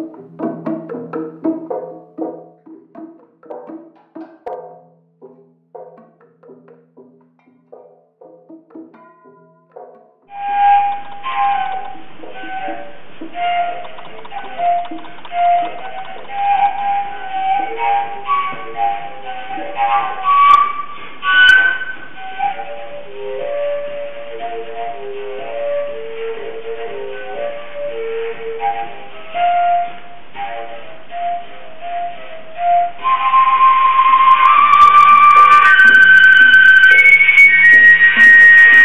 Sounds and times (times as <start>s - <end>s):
Traditional music: 0.0s - 38.8s.